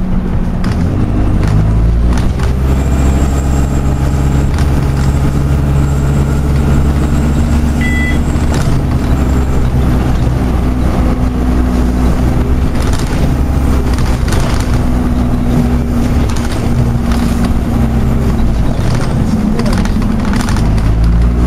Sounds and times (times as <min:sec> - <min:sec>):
Bus: 0:00.0 - 0:21.4.